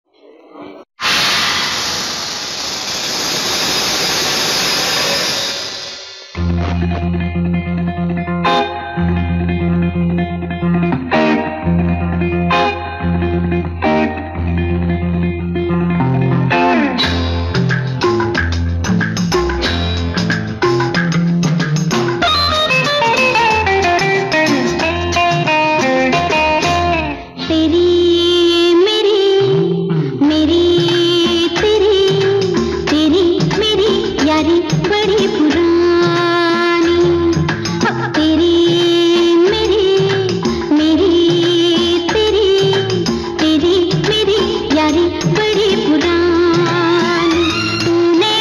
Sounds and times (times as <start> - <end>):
Music: 5.5 - 48.4.